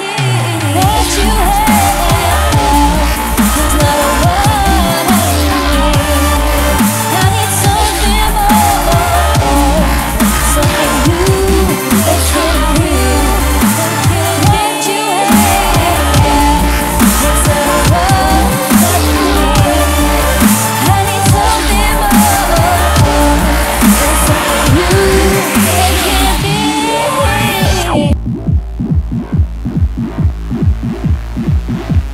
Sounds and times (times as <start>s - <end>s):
Dubstep: 0.0s - 32.1s.